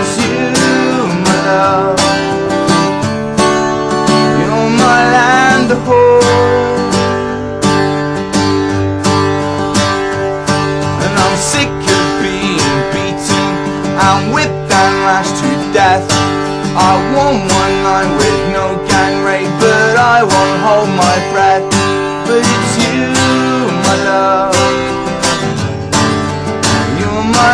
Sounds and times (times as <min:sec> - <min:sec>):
Music: 0:00.0 - 0:27.5.